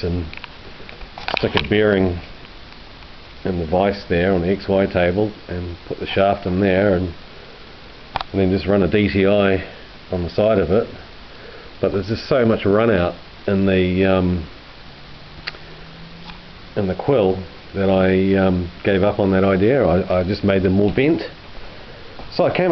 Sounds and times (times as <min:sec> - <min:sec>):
Speech: 0:00.0 - 0:00.3, 0:01.4 - 0:02.3, 0:03.4 - 0:07.2, 0:08.3 - 0:11.0, 0:11.8 - 0:14.5, 0:16.8 - 0:21.4, 0:22.3 - 0:22.7.